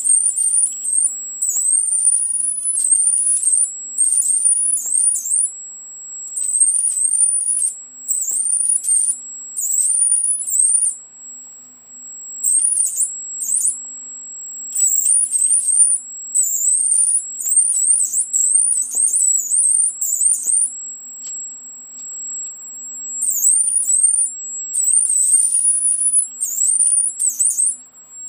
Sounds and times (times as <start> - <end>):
Inside, small room: 0.0 - 28.2.